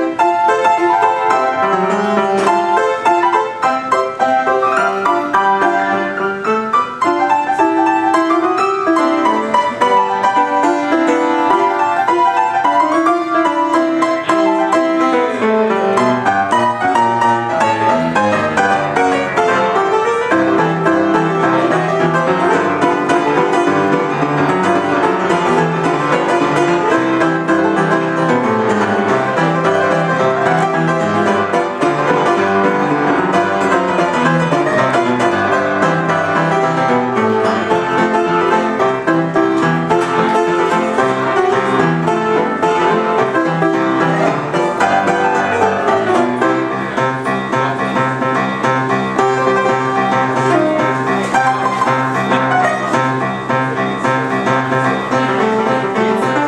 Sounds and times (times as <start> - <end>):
Music: 0.0 - 56.4.